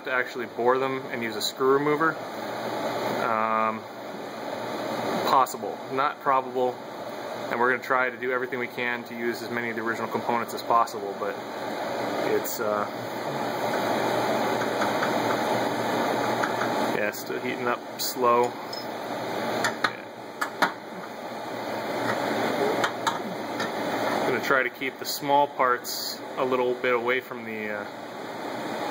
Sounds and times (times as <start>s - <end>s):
Speech: 0.0s - 2.2s, 3.2s - 3.8s, 5.2s - 6.8s, 7.5s - 11.4s, 12.2s - 12.9s, 16.9s - 18.6s, 24.3s - 27.9s.